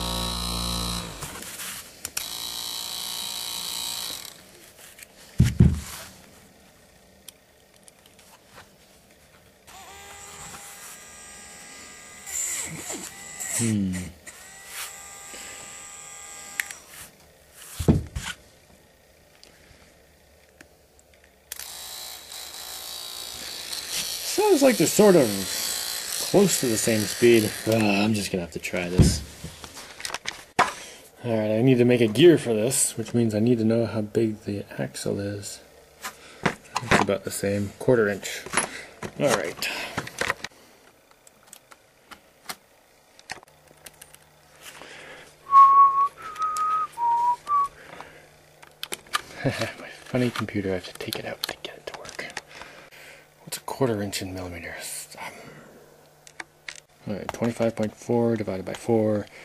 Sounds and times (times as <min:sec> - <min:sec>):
Speech: 0:13.6 - 0:14.2, 0:24.3 - 0:25.6, 0:26.3 - 0:29.3, 0:31.2 - 0:35.7, 0:36.8 - 0:38.5, 0:39.2 - 0:40.0, 0:49.4 - 0:52.4, 0:53.4 - 0:55.3, 0:57.0 - 0:59.3.